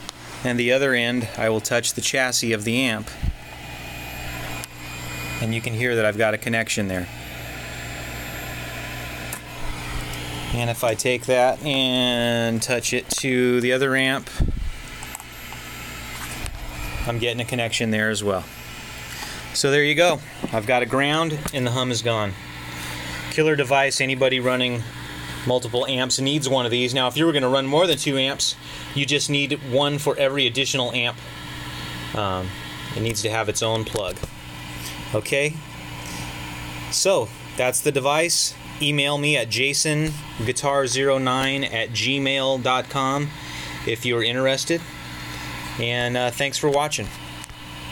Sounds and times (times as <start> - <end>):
Speech: 0.4 - 3.2, 5.4 - 7.1, 10.5 - 14.4, 17.1 - 18.5, 19.6 - 22.4, 23.3 - 31.2, 32.1 - 34.3, 35.1 - 35.6, 36.9 - 44.9, 45.8 - 47.2.